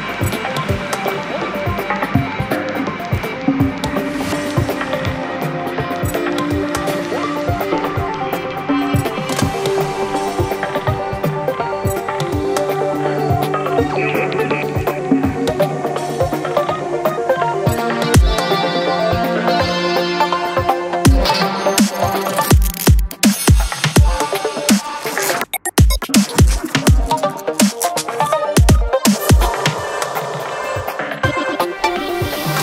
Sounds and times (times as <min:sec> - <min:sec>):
Dubstep: 0:00.2 - 0:32.6.